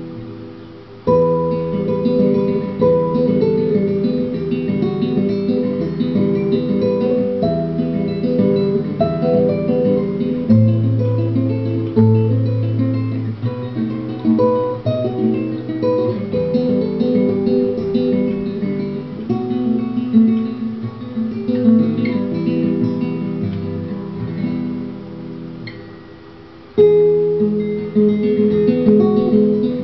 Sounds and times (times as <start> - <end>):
Acoustic guitar: 0.0 - 29.8
Strum: 0.0 - 29.8.